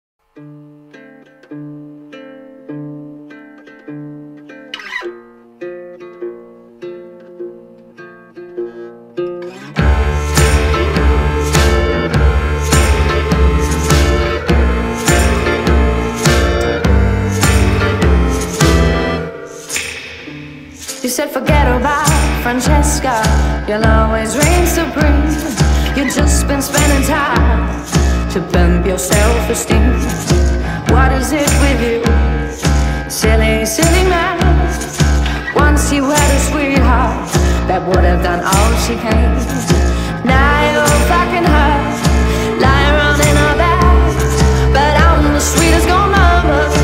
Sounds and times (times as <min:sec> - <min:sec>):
Pizzicato: 0:03.0 - 0:46.8.